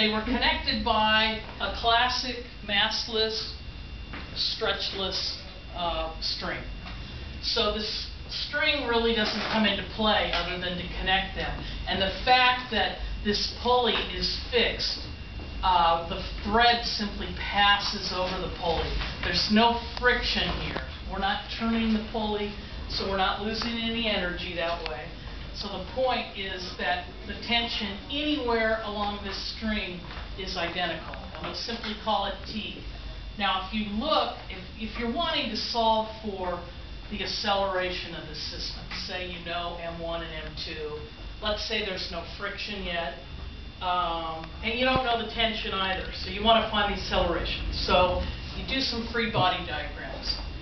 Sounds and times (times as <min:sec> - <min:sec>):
Speech: 0:00.0 - 0:03.7, 0:04.4 - 0:06.8, 0:07.4 - 0:43.2, 0:43.8 - 0:50.5.